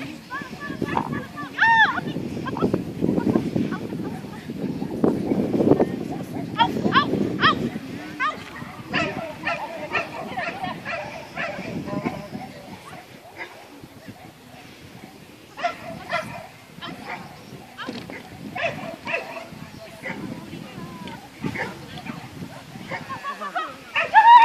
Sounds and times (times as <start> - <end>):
Bow-wow: 15.6 - 17.3, 18.1 - 20.2
Speech: 19.3 - 22.3.